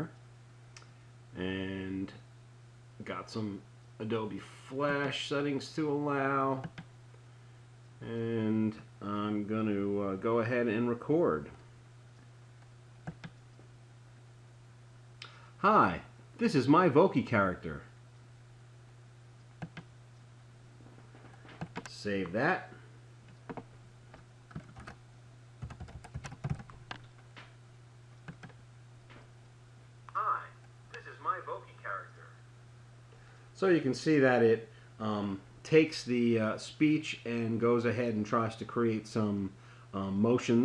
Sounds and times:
Speech: 0:01.4 - 0:02.2, 0:03.0 - 0:06.7, 0:08.0 - 0:11.6, 0:15.6 - 0:17.9, 0:21.9 - 0:22.8, 0:30.2 - 0:32.4, 0:33.6 - 0:40.6.

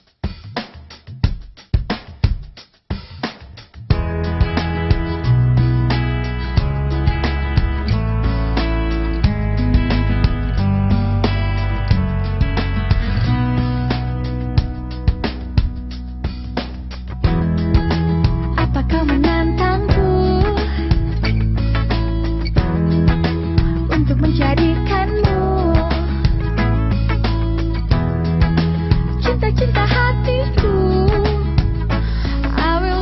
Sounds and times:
Music: 0:00.0 - 0:33.0.

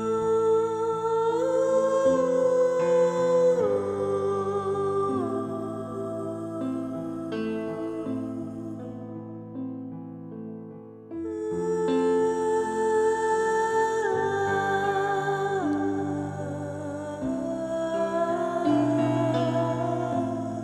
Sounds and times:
Music: 0:00.0 - 0:20.6.

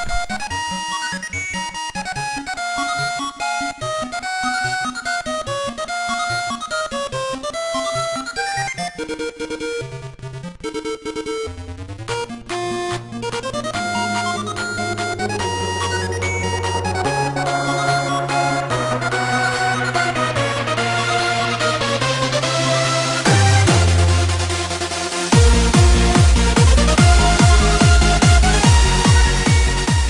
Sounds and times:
Music: 0:00.0 - 0:30.1.

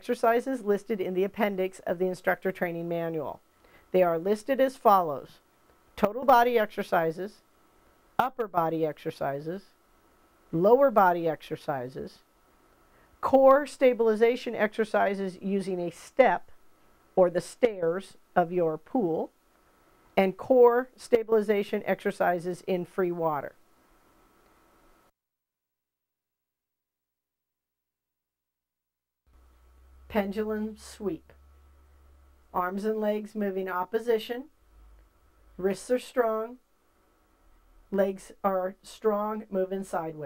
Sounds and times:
Speech: 0:00.0 - 0:03.4, 0:04.0 - 0:05.4, 0:06.0 - 0:07.4, 0:08.2 - 0:09.7, 0:10.5 - 0:12.2, 0:13.2 - 0:16.5, 0:17.2 - 0:19.3, 0:20.2 - 0:23.6, 0:30.1 - 0:31.3, 0:32.6 - 0:34.5, 0:35.6 - 0:36.6, 0:37.9 - 0:40.2.

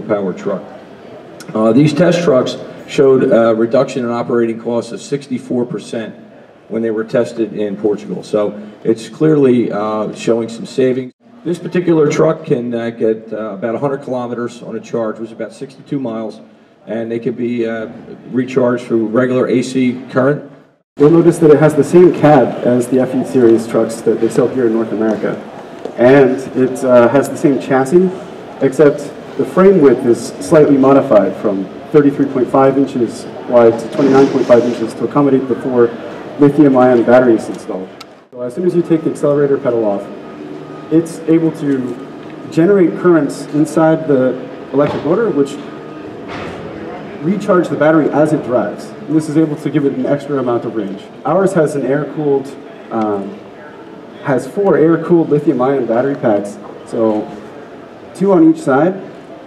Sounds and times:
Speech: 0:00.0 - 0:40.2, 0:40.9 - 0:45.8, 0:46.8 - 0:57.4, 0:58.2 - 0:59.1.

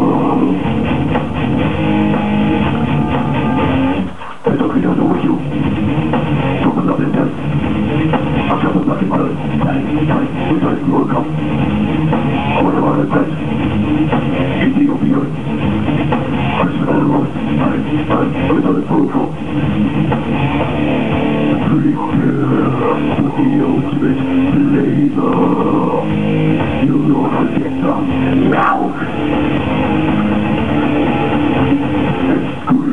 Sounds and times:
Rock music: 0:00.0 - 0:32.9.

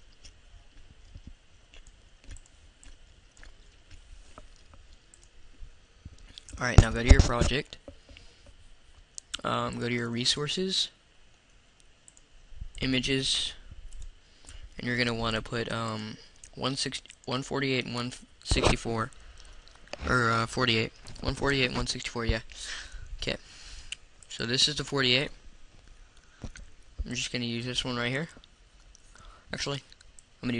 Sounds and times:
Speech: 0:06.6 - 0:07.8, 0:09.3 - 0:11.0, 0:12.8 - 0:13.7, 0:14.8 - 0:19.2, 0:20.0 - 0:23.4, 0:24.3 - 0:25.4, 0:27.0 - 0:28.4, 0:29.5 - 0:30.6.

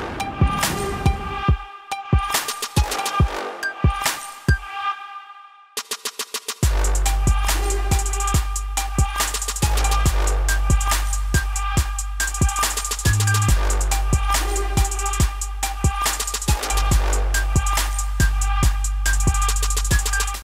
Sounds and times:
Music: 0:00.0 - 0:20.4.

